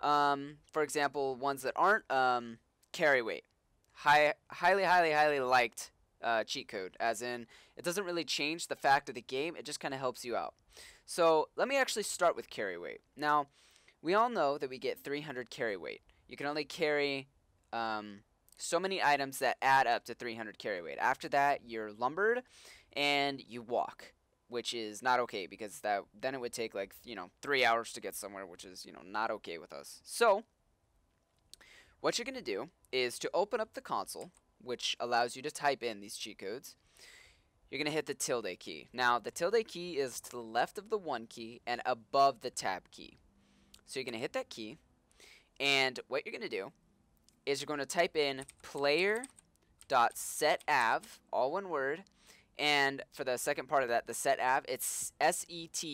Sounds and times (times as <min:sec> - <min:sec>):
Speech: 0:00.0 - 0:30.5, 0:32.0 - 0:36.8, 0:37.8 - 0:43.2, 0:43.8 - 0:44.8, 0:45.6 - 0:46.7, 0:47.5 - 0:49.3, 0:49.9 - 0:55.9.